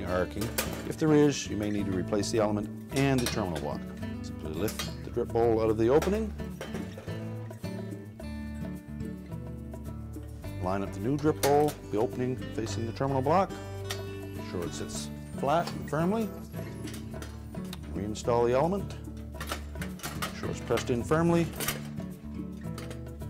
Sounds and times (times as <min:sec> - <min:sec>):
Speech: 0:00.0 - 0:06.4, 0:10.6 - 0:13.5, 0:14.4 - 0:16.3, 0:17.9 - 0:19.0, 0:20.4 - 0:21.6
Music: 0:00.0 - 0:23.3.